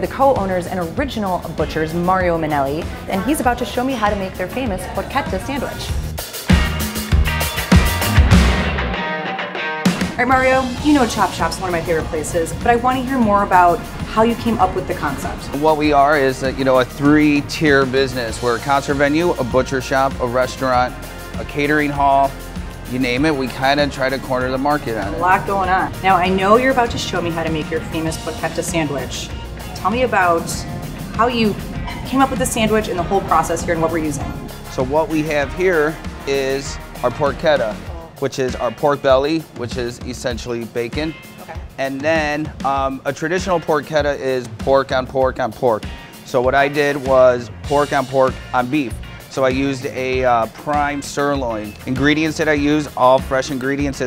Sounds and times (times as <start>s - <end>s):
Music: 0.0s - 54.0s.